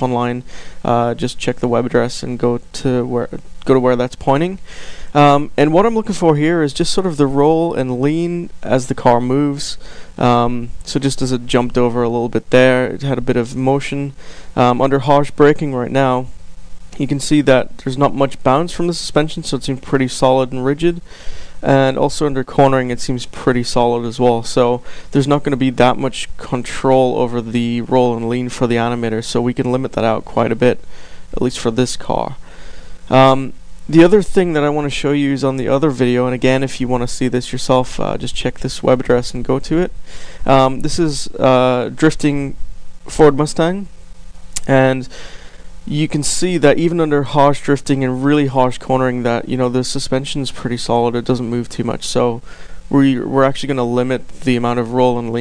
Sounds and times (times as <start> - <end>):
Speech: 0.0 - 16.3, 17.0 - 32.4, 33.1 - 43.9, 44.6 - 45.1, 45.9 - 55.4.